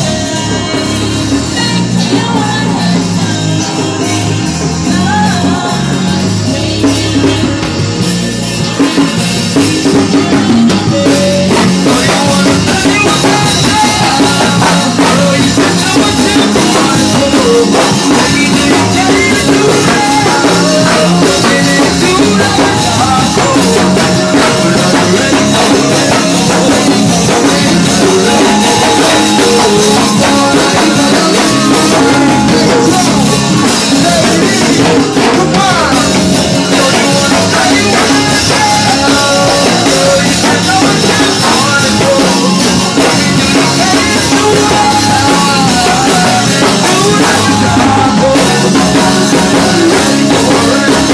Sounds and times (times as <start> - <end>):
Music: 0.0 - 51.1.